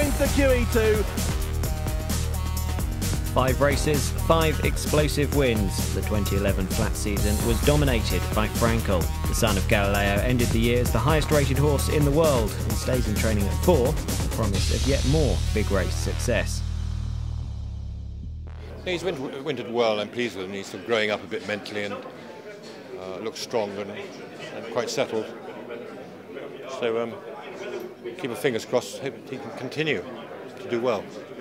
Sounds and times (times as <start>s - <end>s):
Speech: 0.0s - 1.1s, 3.4s - 16.6s, 18.8s - 31.4s
Music: 0.0s - 19.2s.